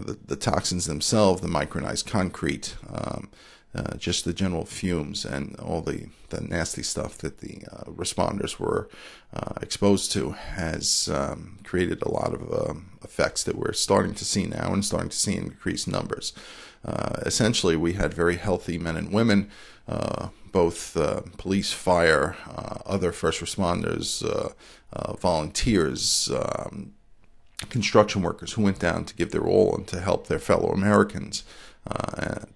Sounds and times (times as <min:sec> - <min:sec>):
Speech: 0:00.0 - 0:27.0, 0:27.6 - 0:32.5.